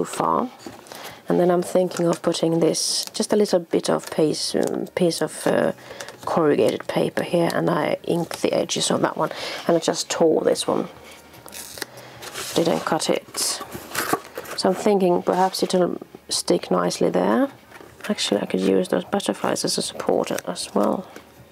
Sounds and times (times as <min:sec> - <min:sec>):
Speech: 0:00.0 - 0:00.6, 0:01.3 - 0:10.9, 0:12.6 - 0:13.6, 0:14.6 - 0:21.1.